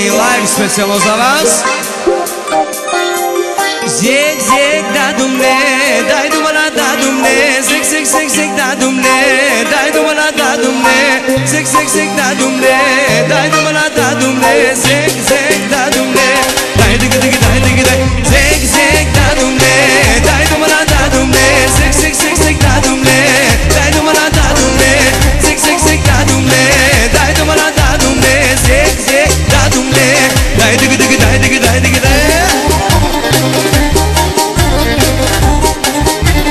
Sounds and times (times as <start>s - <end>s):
Music: 0.0s - 36.5s.